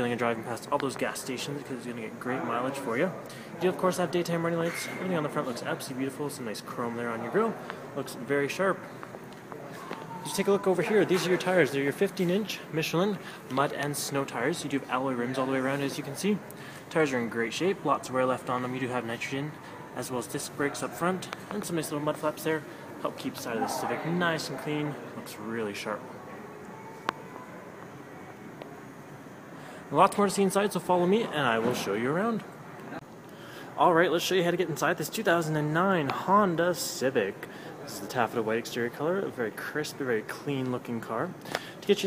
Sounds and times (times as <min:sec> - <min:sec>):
Speech: 0:00.0 - 0:08.9, 0:09.6 - 0:26.2, 0:29.9 - 0:32.5, 0:33.8 - 0:42.0.